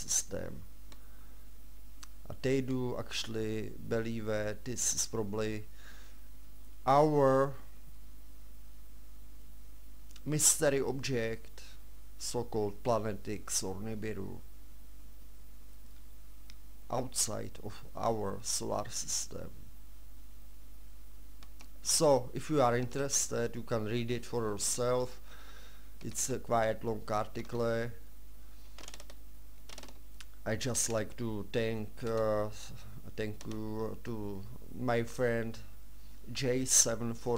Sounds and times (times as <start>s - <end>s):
Speech: 0.0s - 0.7s, 2.2s - 5.7s, 6.8s - 7.7s, 10.2s - 14.5s, 16.9s - 19.6s, 21.8s - 25.2s, 26.0s - 28.0s, 30.4s - 35.7s, 36.3s - 37.3s.